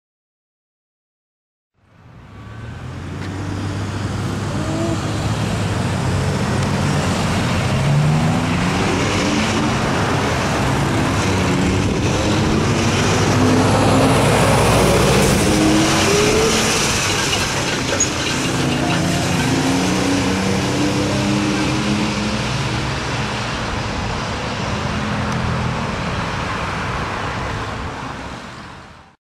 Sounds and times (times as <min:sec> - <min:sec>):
Truck: 0:01.8 - 0:29.2.